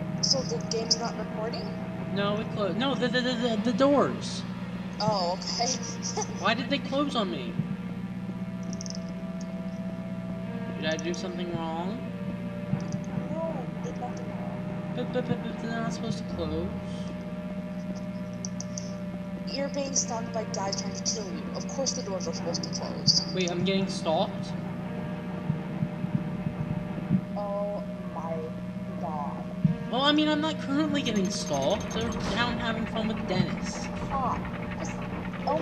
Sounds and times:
Music: 0.0 - 35.6
Speech: 0.2 - 4.4, 5.0 - 7.6, 10.8 - 12.1, 13.2 - 17.0, 19.4 - 24.6, 27.4 - 35.6.

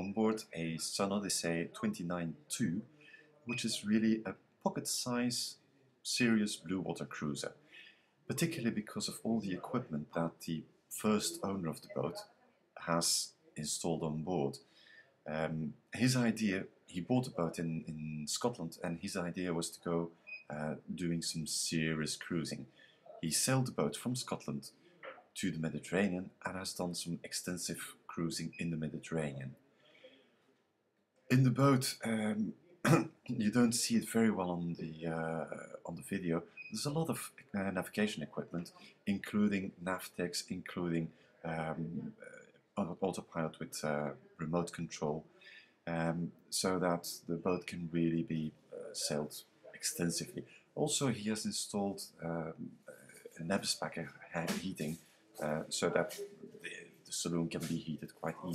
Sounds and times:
Speech: 0.0 - 7.6, 8.3 - 14.6, 15.3 - 29.6, 31.3 - 45.3, 45.9 - 58.5.

